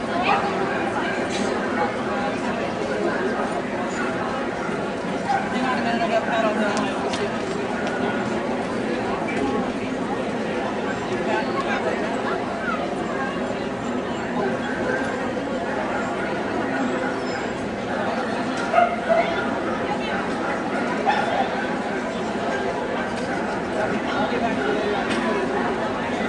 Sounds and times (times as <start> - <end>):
Speech: 0.0 - 26.2
Bow-wow: 18.7 - 21.8.